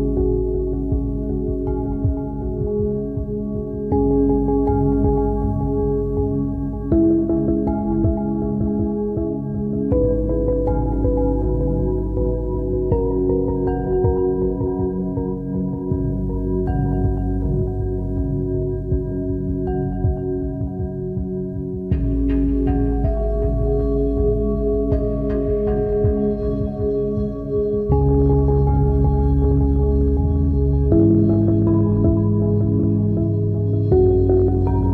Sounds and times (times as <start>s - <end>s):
Synthesizer: 0.0s - 34.9s.